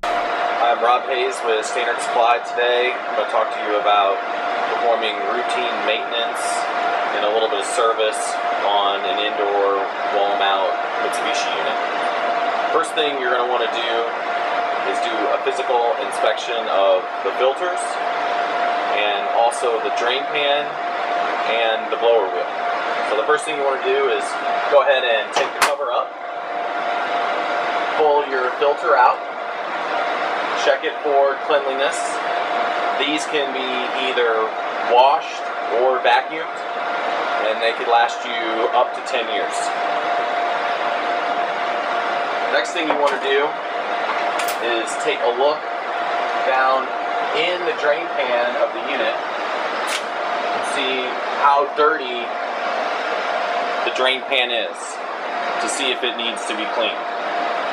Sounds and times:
Speech: 0.6 - 11.8, 12.7 - 14.1, 14.9 - 18.0, 18.9 - 20.8, 21.5 - 22.5, 23.1 - 26.1, 28.0 - 29.2, 30.6 - 32.2, 33.0 - 36.6, 37.4 - 39.8, 42.5 - 43.6, 44.6 - 45.6, 46.4 - 49.2, 50.6 - 52.3, 53.8 - 55.0, 55.6 - 57.0.

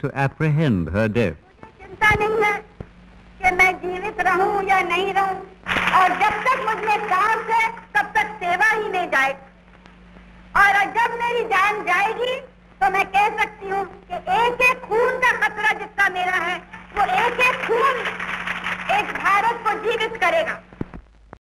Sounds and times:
Narration, monologue: 0.0 - 21.0
Female speech, woman speaking: 1.5 - 2.7, 3.4 - 9.5, 10.6 - 18.1, 18.9 - 20.7.

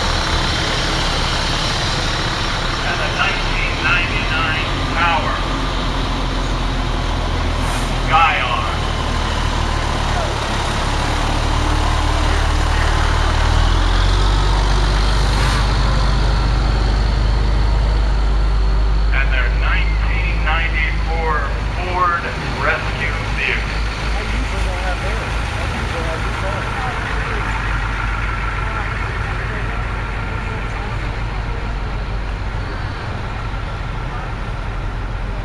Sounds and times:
Truck: 0.0 - 35.4.

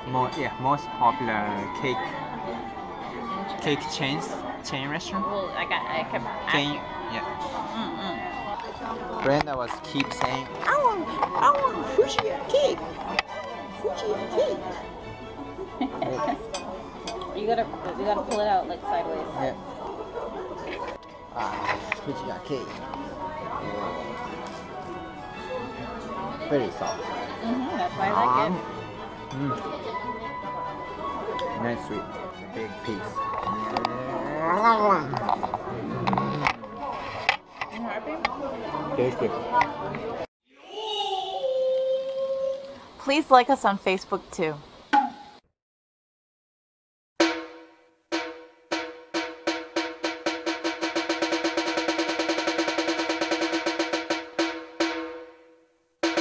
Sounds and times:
Drum roll: 47.2 - 55.4.

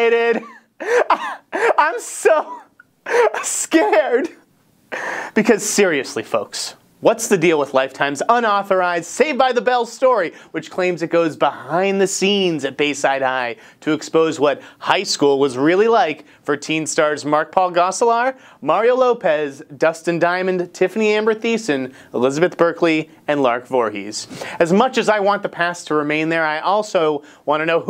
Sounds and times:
Speech: 0.0 - 0.5, 1.7 - 2.6, 3.3 - 4.4, 5.4 - 27.8.

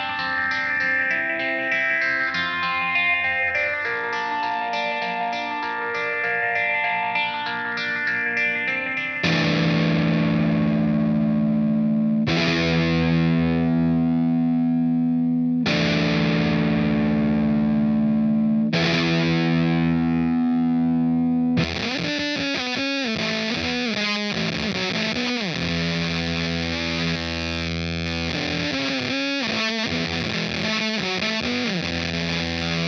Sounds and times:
Electric guitar: 0.0 - 32.8.

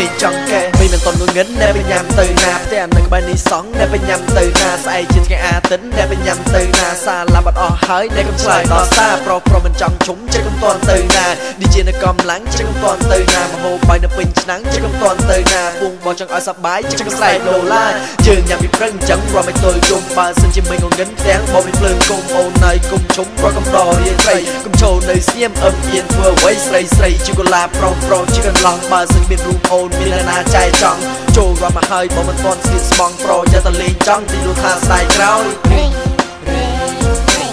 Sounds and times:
Music: 0.0 - 37.5.

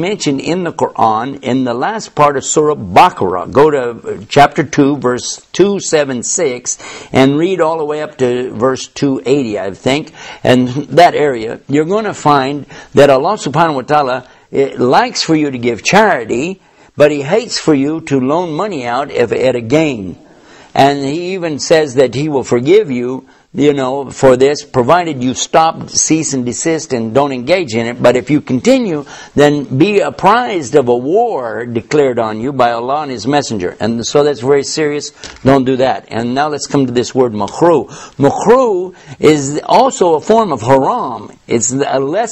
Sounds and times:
Speech: 0.0 - 20.2, 20.8 - 42.3.

